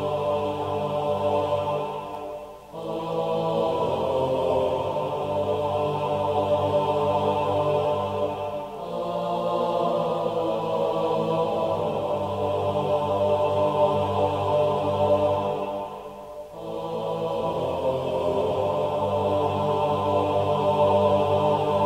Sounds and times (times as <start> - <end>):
Music: 0.0 - 21.8.